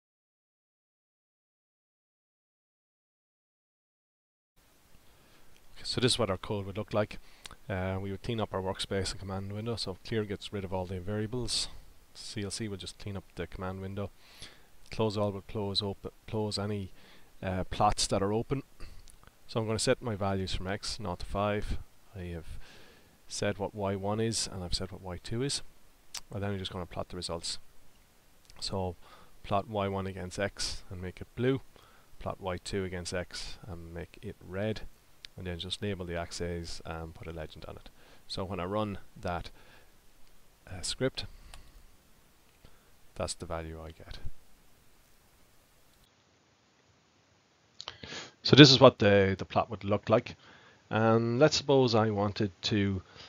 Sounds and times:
Speech: 0:05.8 - 0:14.1, 0:14.9 - 0:18.7, 0:19.5 - 0:22.6, 0:23.3 - 0:27.6, 0:28.5 - 0:31.6, 0:32.2 - 0:39.5, 0:40.7 - 0:41.3, 0:43.2 - 0:44.4, 0:48.4 - 0:53.1.

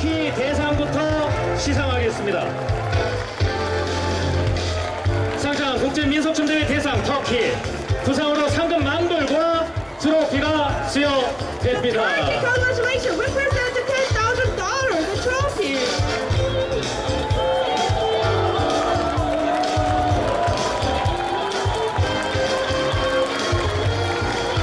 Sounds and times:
Music: 0:00.0 - 0:24.6.

